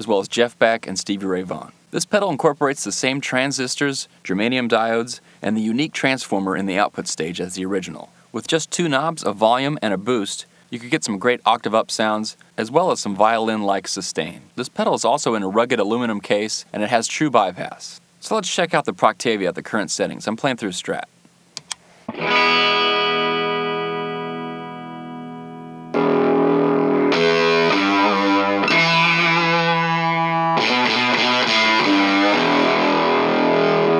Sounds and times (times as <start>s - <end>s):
Speech: 0.0s - 21.2s
Inside, small room: 0.0s - 33.9s
Effects unit: 21.6s - 33.9s
Guitar: 22.0s - 33.9s.